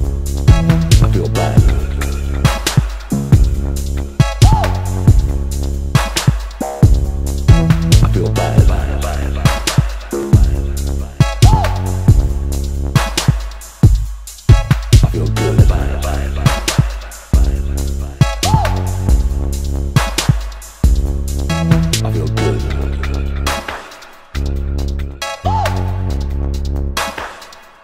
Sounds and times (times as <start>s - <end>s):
Dubstep: 0.0s - 27.8s.